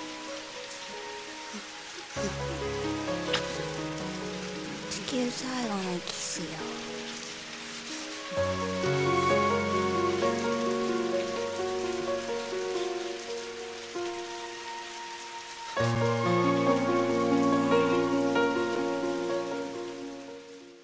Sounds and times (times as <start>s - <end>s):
Rain on surface: 0.0s - 20.8s.